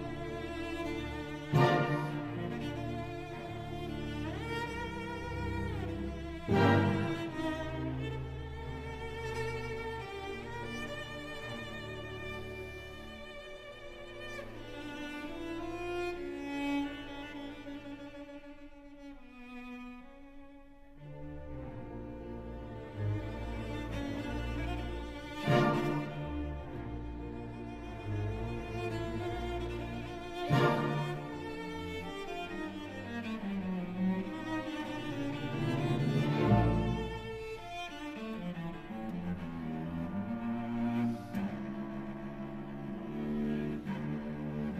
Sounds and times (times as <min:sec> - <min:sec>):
Cello: 0:00.0 - 0:44.7
Orchestra: 0:00.0 - 0:44.7.